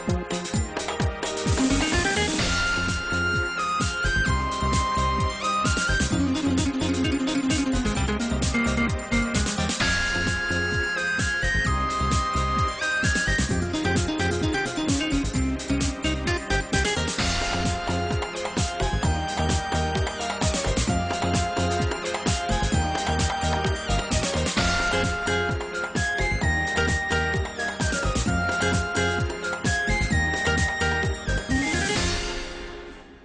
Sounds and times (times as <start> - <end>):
Music: 0.0 - 33.2.